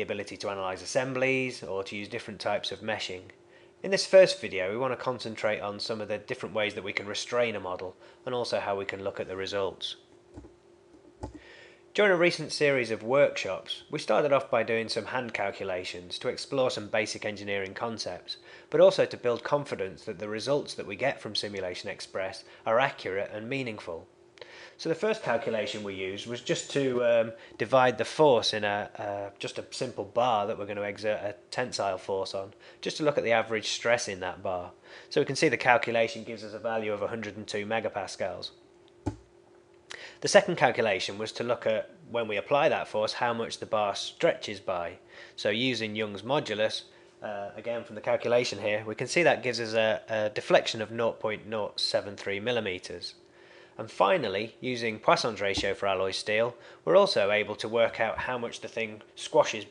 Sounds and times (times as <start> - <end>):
Speech: 0.0 - 10.1, 12.0 - 24.1, 24.8 - 38.6, 39.9 - 53.2, 53.8 - 59.7.